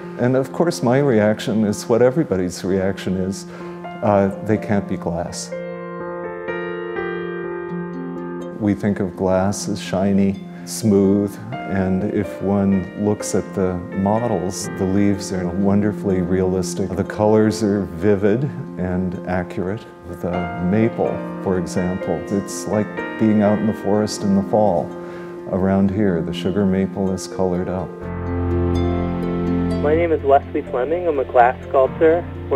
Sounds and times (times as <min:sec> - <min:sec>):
Music: 0:00.0 - 0:32.5
Speech: 0:00.2 - 0:03.4, 0:04.0 - 0:05.5, 0:08.6 - 0:24.9, 0:25.5 - 0:27.9, 0:29.8 - 0:32.5.